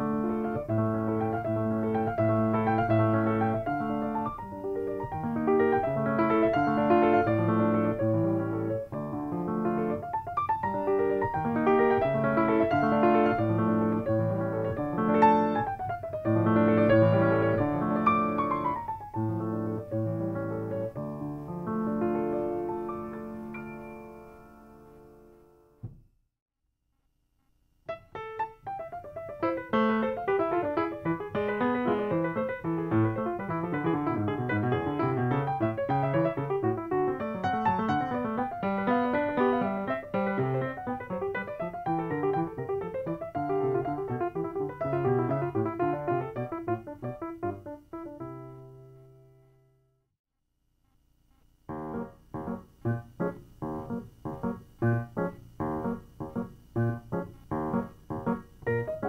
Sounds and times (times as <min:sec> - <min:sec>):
Music: 0:00.0 - 0:26.0, 0:27.9 - 0:50.1, 0:51.7 - 0:59.0.